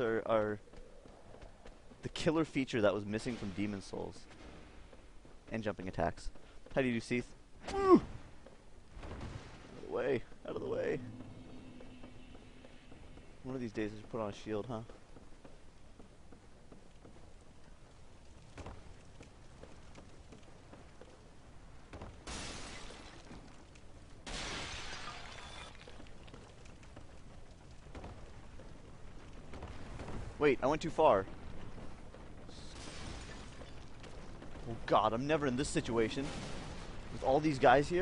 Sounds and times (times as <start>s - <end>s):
Run: 0.0s - 2.7s, 11.0s - 22.2s, 25.7s - 32.6s
Speech: 2.0s - 4.2s, 5.5s - 8.0s, 9.8s - 11.1s, 13.4s - 14.9s, 30.4s - 31.3s, 34.6s - 36.3s, 37.2s - 38.0s.